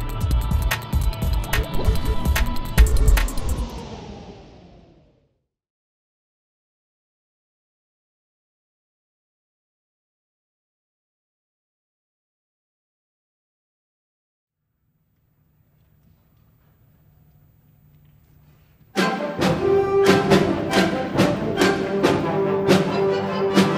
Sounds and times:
Music: 0.0s - 4.8s, 18.9s - 23.7s.

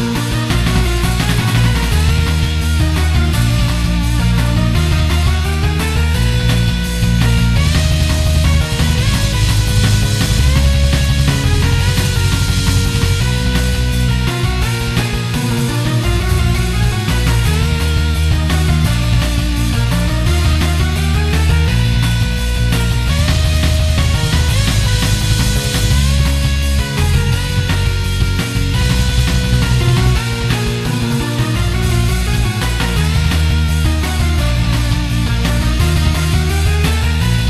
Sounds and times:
Music: 0.0s - 37.4s.

